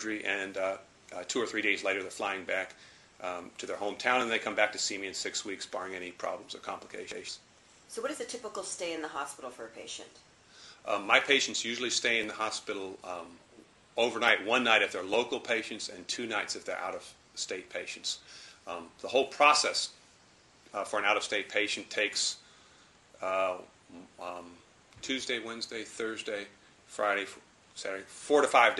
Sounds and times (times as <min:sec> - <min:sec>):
Speech: 0:00.0 - 0:10.2, 0:10.9 - 0:13.4, 0:14.0 - 0:20.0, 0:20.7 - 0:22.4, 0:23.2 - 0:28.7
Inside, small room: 0:00.0 - 0:28.7.